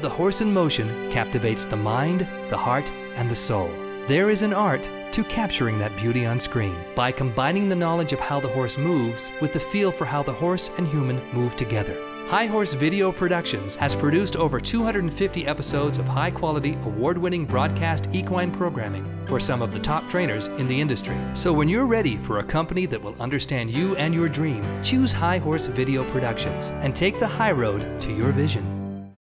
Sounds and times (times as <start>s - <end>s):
Speech: 0.0s - 28.8s
Music: 0.0s - 29.2s.